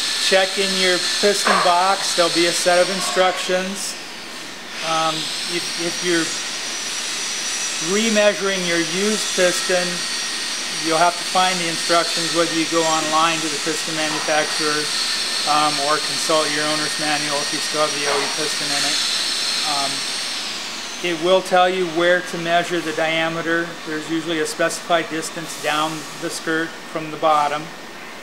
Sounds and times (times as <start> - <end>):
Speech: 0.2 - 4.0, 4.8 - 6.4, 7.8 - 10.0, 10.8 - 14.9, 15.5 - 19.0, 19.6 - 20.0, 21.0 - 27.7.